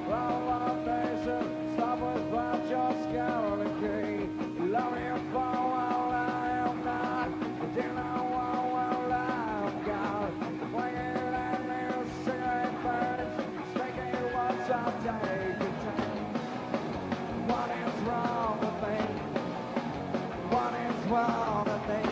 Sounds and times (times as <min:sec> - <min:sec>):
Music: 0:00.0 - 0:22.1.